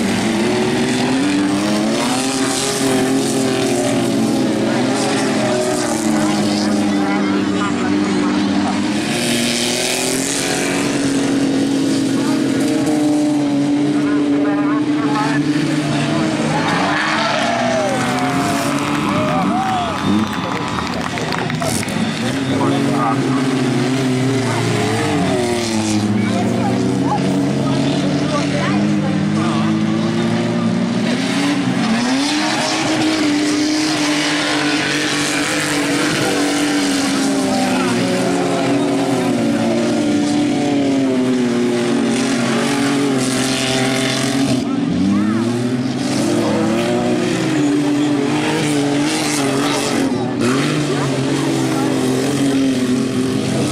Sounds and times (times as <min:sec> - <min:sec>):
Speech: 0:04.5 - 0:08.9, 0:13.8 - 0:16.7, 0:22.5 - 0:23.6, 0:26.1 - 0:30.0.